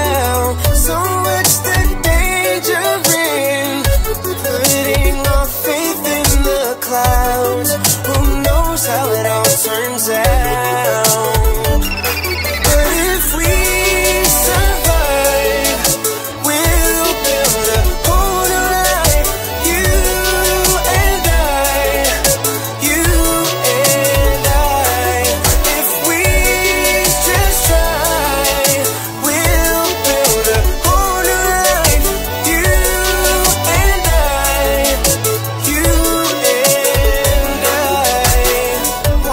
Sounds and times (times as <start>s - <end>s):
Rhythm and blues: 0.0s - 39.3s.